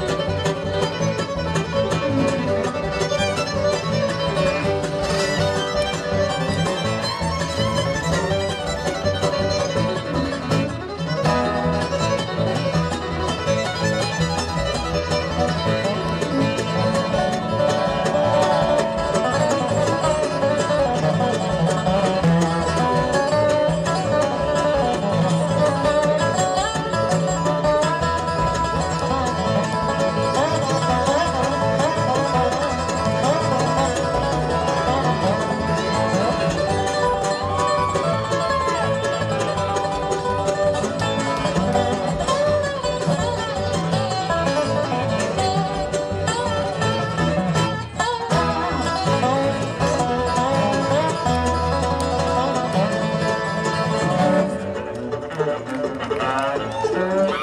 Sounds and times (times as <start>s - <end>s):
Bluegrass: 0.0s - 57.4s.